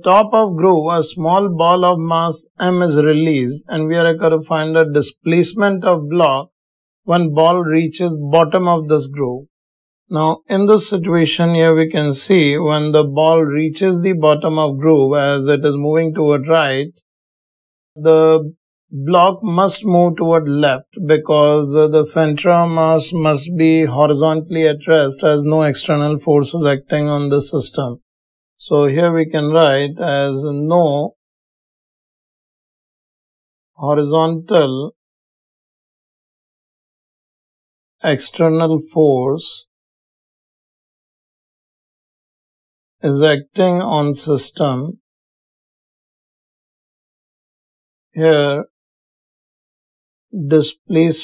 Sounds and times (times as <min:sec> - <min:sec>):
Speech: 0:00.0 - 0:06.5, 0:07.1 - 0:09.4, 0:10.1 - 0:17.0, 0:18.0 - 0:28.0, 0:28.6 - 0:31.2, 0:33.8 - 0:35.0, 0:38.0 - 0:39.7, 0:43.0 - 0:45.0, 0:48.2 - 0:48.7, 0:50.4 - 0:51.2.